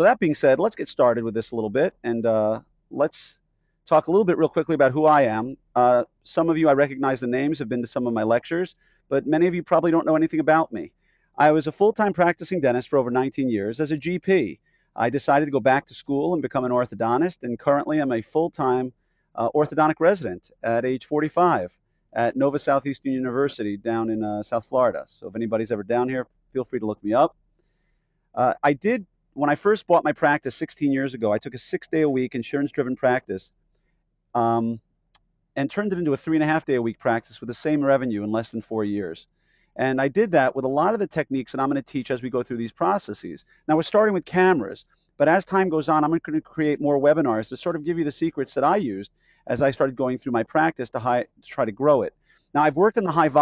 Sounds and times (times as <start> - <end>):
Speech: 0.0 - 27.3, 28.4 - 33.5, 34.4 - 34.8, 35.6 - 53.4.